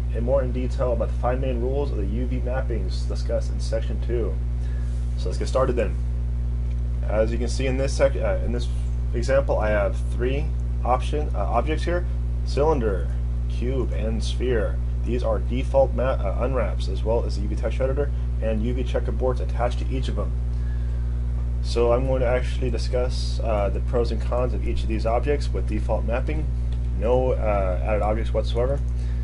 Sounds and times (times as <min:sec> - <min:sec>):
Speech: 0:00.1 - 0:04.4, 0:05.2 - 0:06.0, 0:07.0 - 0:20.4, 0:21.6 - 0:28.9.